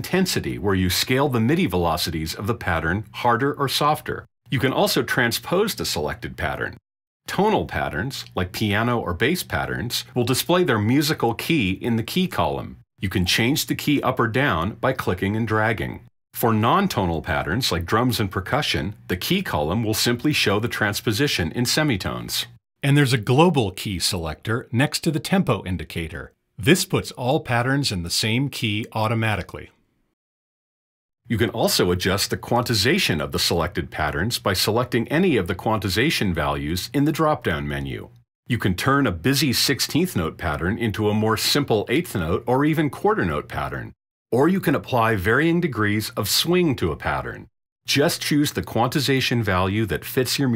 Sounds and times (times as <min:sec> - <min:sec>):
Speech synthesizer: 0:00.0 - 0:29.7, 0:31.3 - 0:50.5.